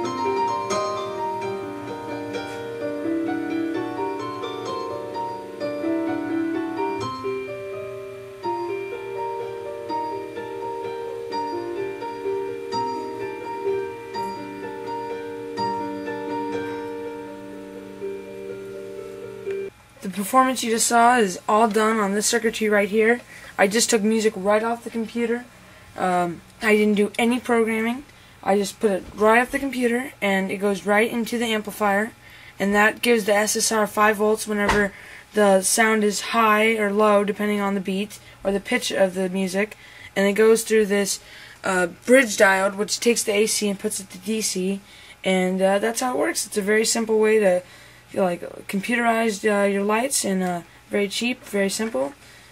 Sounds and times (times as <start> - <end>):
Speech: 20.0 - 52.2.